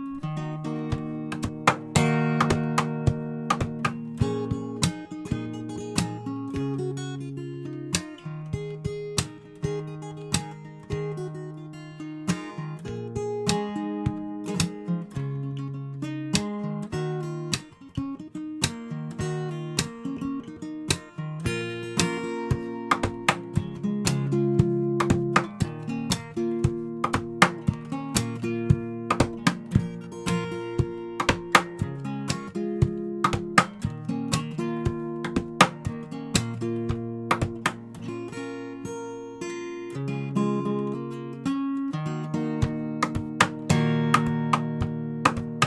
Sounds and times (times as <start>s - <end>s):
Guitar: 0.0s - 45.6s.